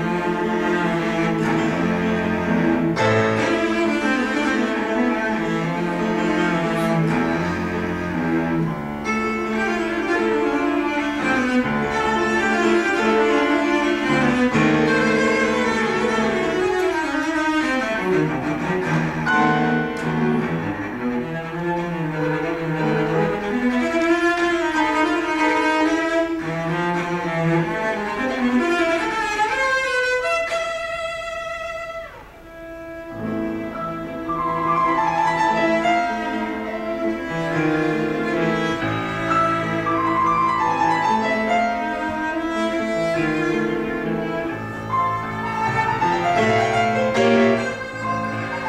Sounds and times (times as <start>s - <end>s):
Cello: 0.0s - 48.6s.